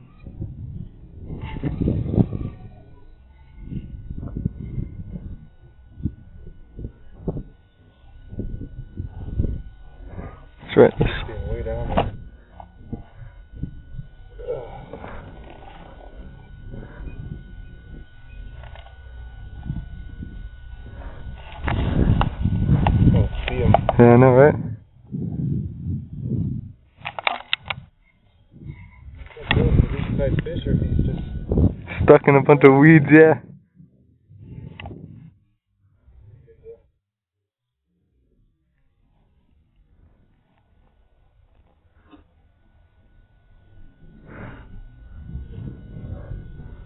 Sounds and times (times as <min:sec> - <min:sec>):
Speech: 0:10.6 - 0:12.1, 0:23.4 - 0:24.8, 0:29.4 - 0:33.5.